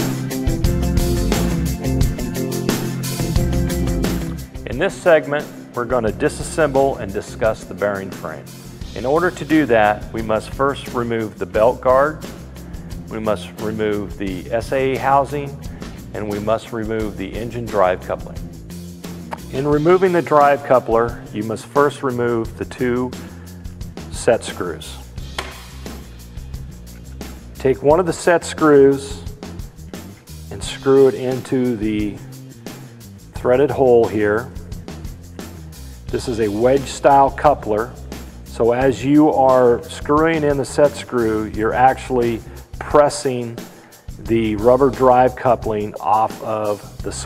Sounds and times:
Music: 0.0s - 47.2s
Speech: 4.6s - 12.2s, 13.1s - 18.4s, 19.4s - 23.2s, 24.1s - 25.1s, 27.6s - 29.3s, 30.5s - 32.3s, 33.4s - 34.6s, 36.1s - 43.6s, 44.2s - 47.2s.

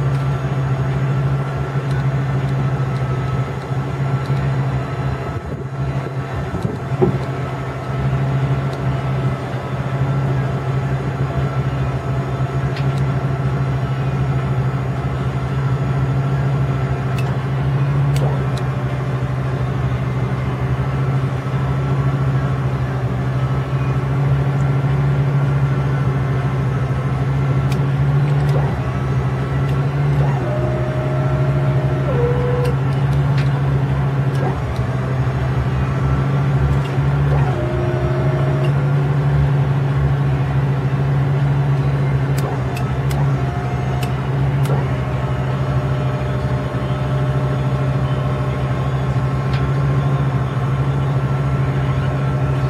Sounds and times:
Truck: 0.0s - 52.7s.

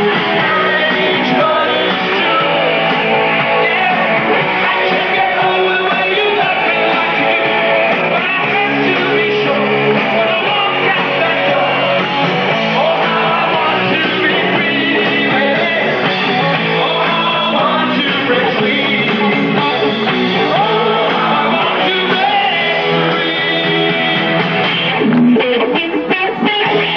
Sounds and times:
Music: 0.0s - 26.9s.

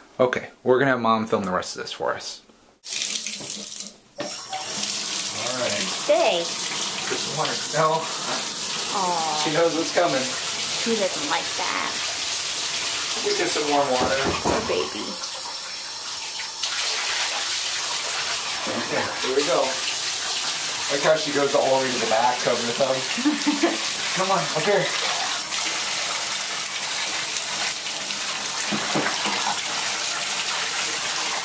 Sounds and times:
Speech: 0.2s - 2.4s, 13.2s - 15.2s, 20.9s - 23.1s, 24.2s - 25.3s.

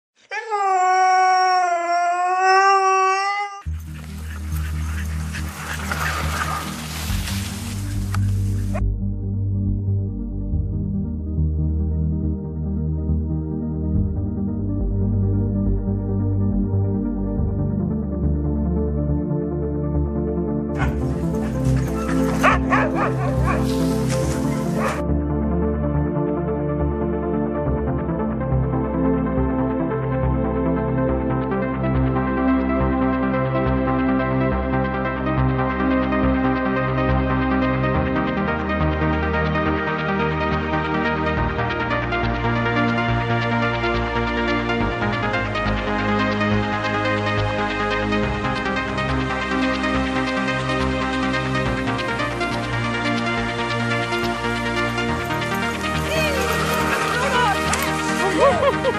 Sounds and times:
Outside, rural or natural: 0.2s - 58.9s
Music: 3.6s - 58.9s.

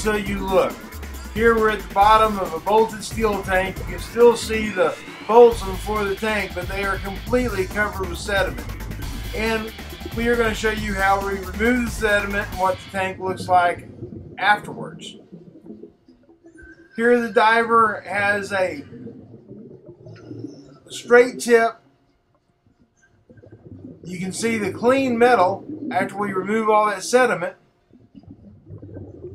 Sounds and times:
Speech: 0.0s - 0.8s, 1.4s - 8.6s, 9.4s - 13.8s, 14.4s - 15.2s, 17.0s - 18.8s, 21.0s - 21.8s, 24.1s - 27.6s
Music: 0.0s - 12.9s.

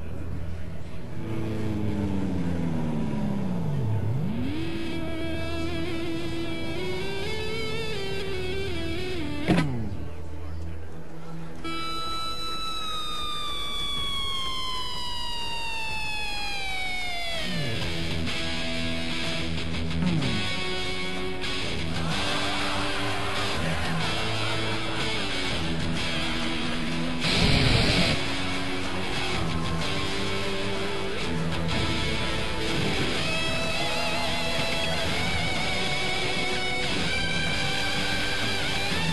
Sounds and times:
Music: 0.0s - 39.1s.

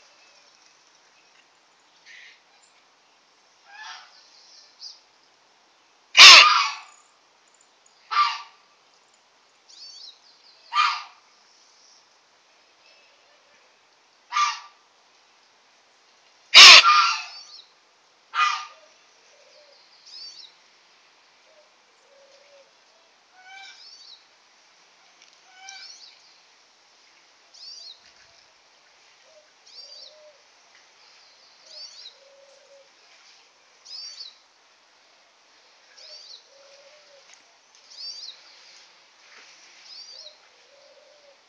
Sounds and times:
Outside, rural or natural: 0.0s - 41.4s.

